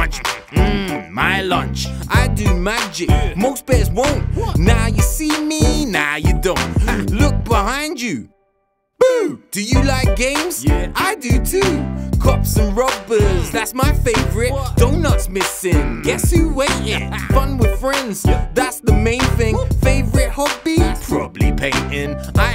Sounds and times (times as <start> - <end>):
Music: 0.0 - 7.8, 9.6 - 22.5.